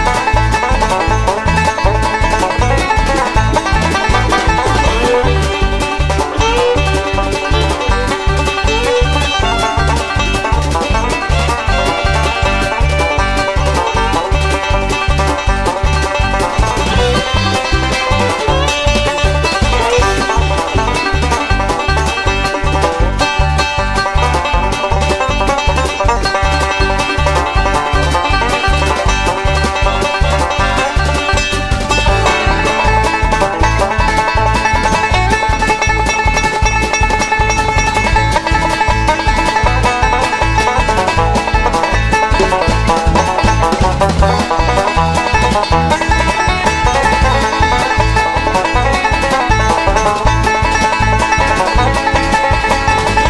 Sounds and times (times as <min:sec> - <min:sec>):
Music: 0:00.0 - 0:53.2.